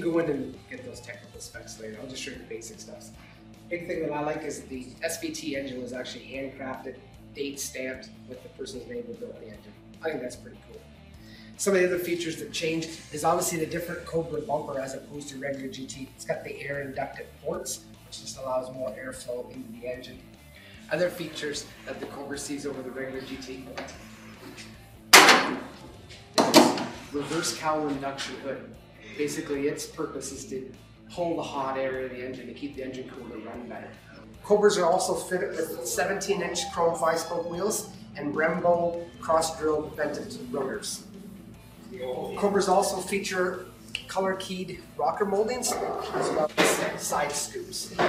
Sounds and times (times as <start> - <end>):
Speech: 0.0 - 10.8, 11.6 - 20.2, 20.9 - 23.9, 27.1 - 41.0, 41.9 - 48.0.